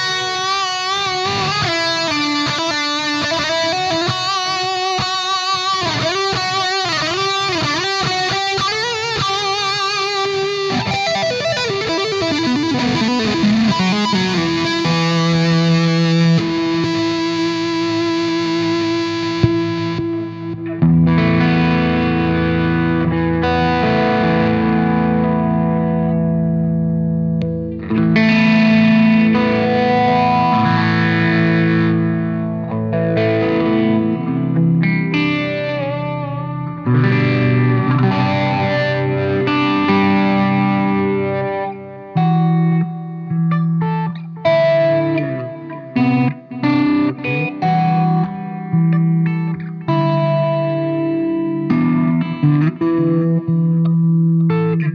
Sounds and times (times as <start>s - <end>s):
Effects unit: 0.0s - 54.9s
Guitar: 0.0s - 54.9s.